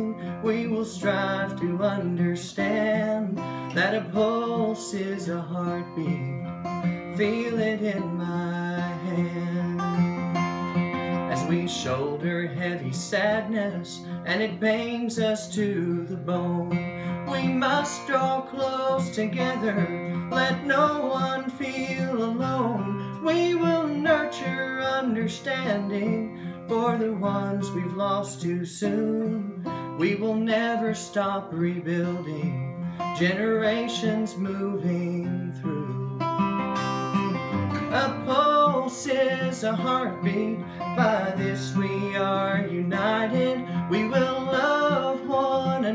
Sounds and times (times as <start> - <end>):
Guitar: 0.0 - 45.9.